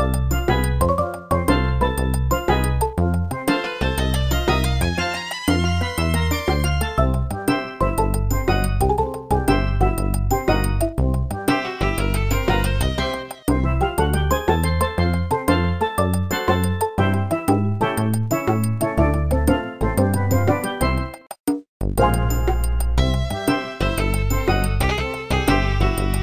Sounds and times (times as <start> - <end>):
Video game music: 0.0 - 26.2.